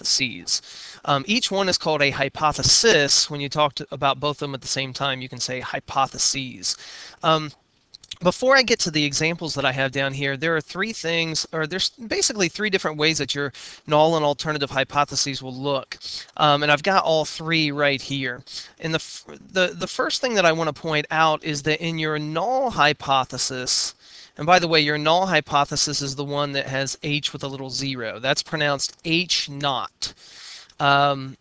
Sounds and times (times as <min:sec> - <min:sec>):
Speech: 0:00.0 - 0:30.2, 0:30.8 - 0:31.4.